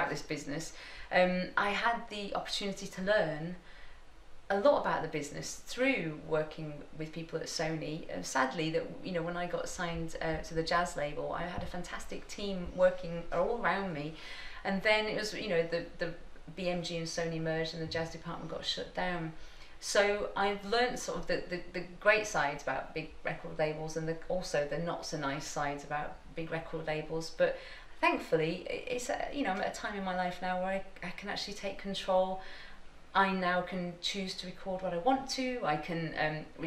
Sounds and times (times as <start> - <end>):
Speech: 0.0 - 3.6, 4.5 - 32.4, 33.2 - 36.6.